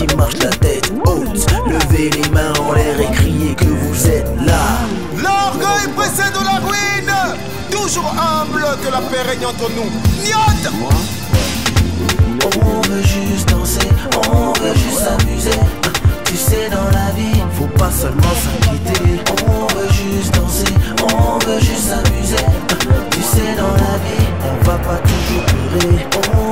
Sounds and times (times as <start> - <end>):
Music: 0.0 - 26.5.